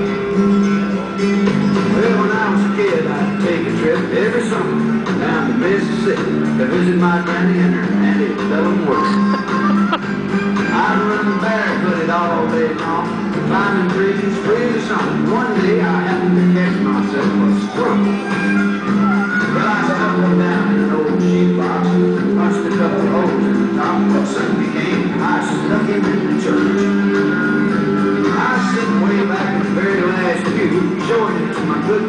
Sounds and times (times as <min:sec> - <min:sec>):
Music: 0:00.0 - 0:32.0
Whimper (dog): 0:18.2 - 0:19.5.